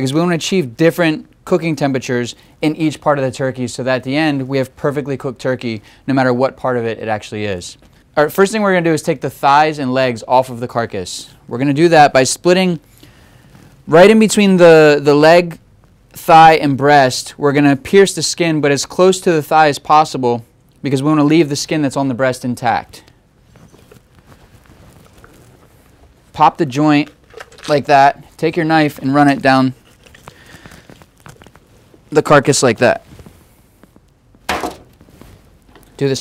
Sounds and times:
Speech: 0:00.0 - 0:12.8, 0:13.9 - 0:15.6, 0:16.2 - 0:23.1, 0:26.4 - 0:29.8, 0:32.1 - 0:33.1, 0:36.0 - 0:36.2.

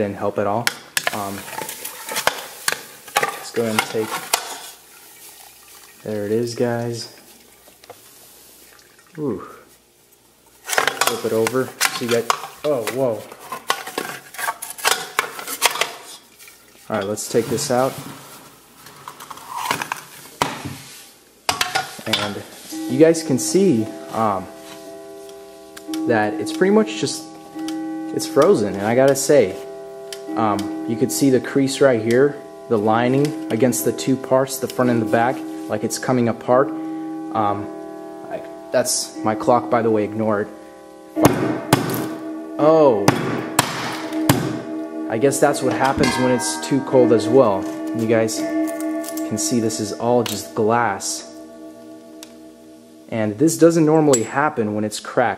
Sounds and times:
Speech: 0:00.0 - 0:01.5, 0:03.4 - 0:04.2, 0:06.0 - 0:07.2, 0:09.2 - 0:09.7, 0:11.0 - 0:13.3, 0:16.9 - 0:18.0, 0:22.0 - 0:24.5, 0:26.0 - 0:27.3, 0:28.2 - 0:29.6, 0:30.4 - 0:36.7, 0:37.4 - 0:37.7, 0:38.3 - 0:40.5, 0:42.6 - 0:43.1, 0:45.1 - 0:48.5, 0:49.2 - 0:51.3, 0:53.1 - 0:55.3
Liquid: 0:04.9 - 0:06.1, 0:07.2 - 0:07.8, 0:08.6 - 0:09.3.

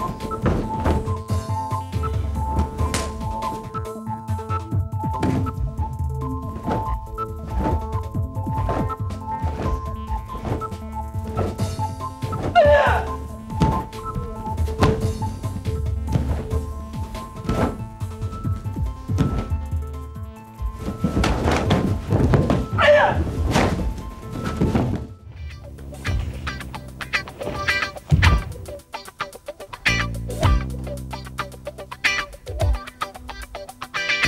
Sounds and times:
Music: 0:00.0 - 0:34.2.

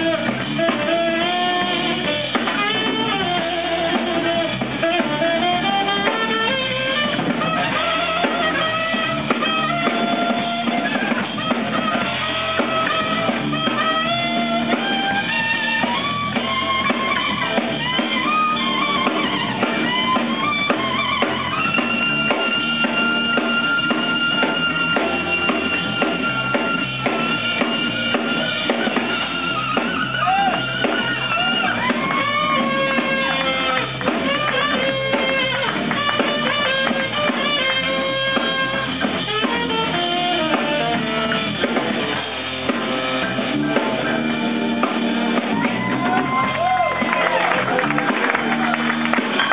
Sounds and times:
Inside, large room or hall: 0:00.0 - 0:49.5
Jazz: 0:00.0 - 0:49.5.

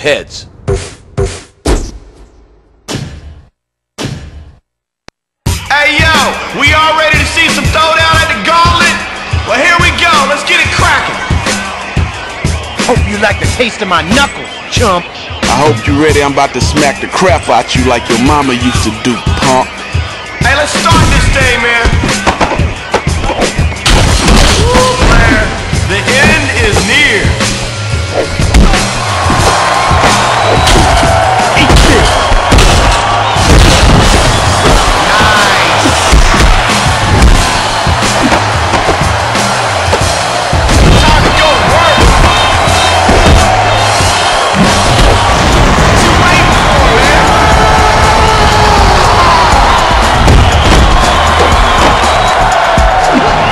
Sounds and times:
Music: 0:05.4 - 0:53.5.

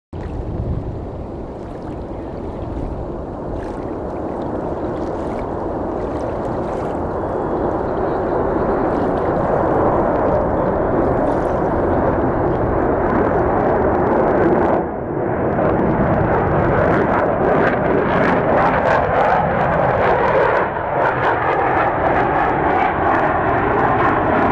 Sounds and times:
Aircraft: 0:00.2 - 0:24.5.

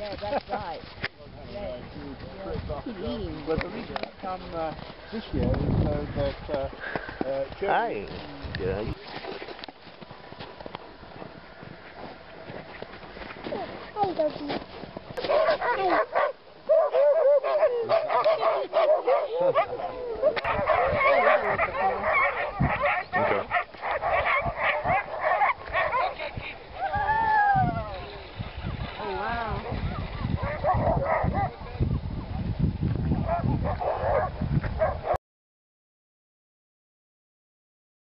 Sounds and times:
Bow-wow: 0:15.2 - 0:26.2, 0:30.4 - 0:31.6, 0:33.2 - 0:35.2.

